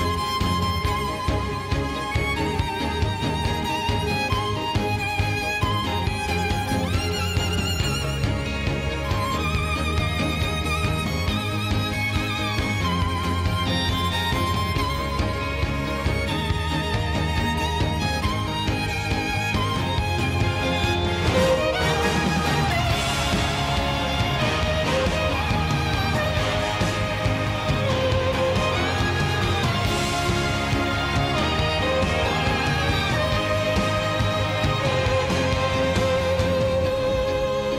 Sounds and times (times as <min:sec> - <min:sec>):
Music: 0:00.0 - 0:37.7.